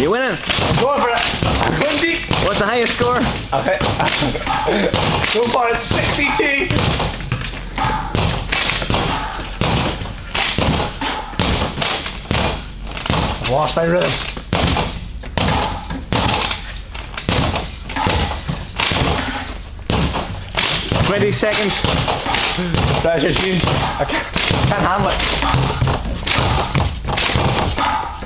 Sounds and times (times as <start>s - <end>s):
Basketball bounce: 23.7s - 27.9s.